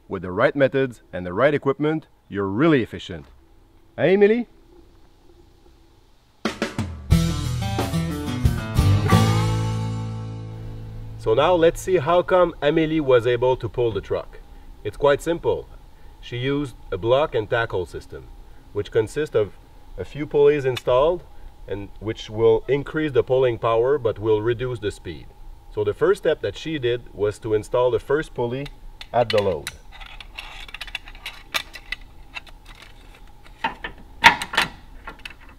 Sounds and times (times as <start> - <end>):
Speech: 0.1 - 3.4, 4.0 - 4.5, 11.2 - 29.8.